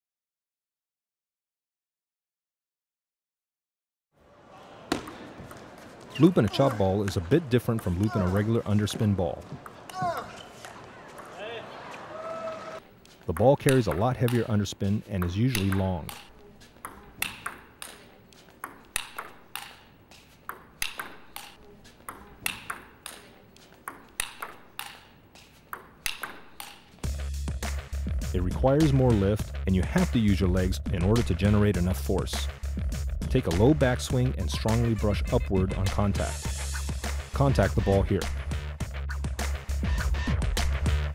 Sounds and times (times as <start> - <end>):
Speech: 6.2 - 10.4, 13.3 - 16.2, 28.3 - 32.5, 33.3 - 36.4, 37.4 - 38.3
Music: 26.9 - 41.1.